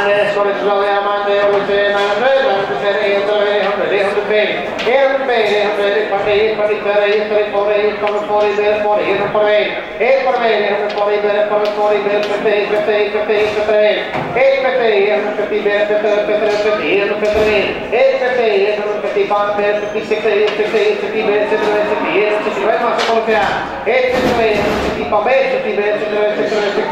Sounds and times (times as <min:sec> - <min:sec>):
Speech: 0:00.0 - 0:26.9.